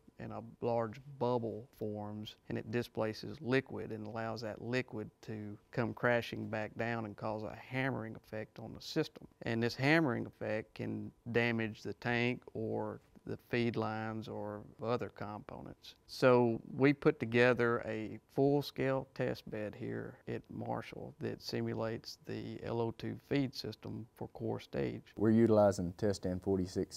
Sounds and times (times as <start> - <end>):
Speech: 0.2 - 26.9.